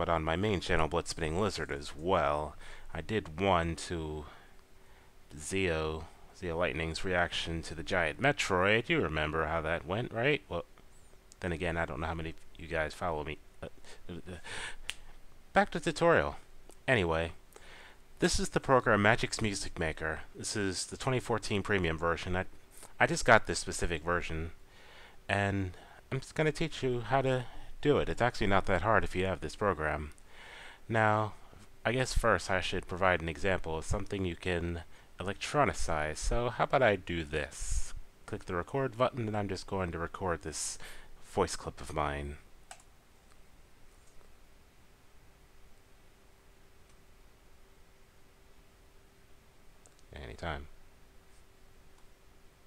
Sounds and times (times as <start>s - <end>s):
Speech: 0.0s - 4.4s, 5.3s - 10.7s, 11.4s - 14.4s, 15.5s - 17.4s, 18.2s - 24.6s, 25.3s - 30.2s, 30.9s - 42.4s, 50.1s - 50.7s.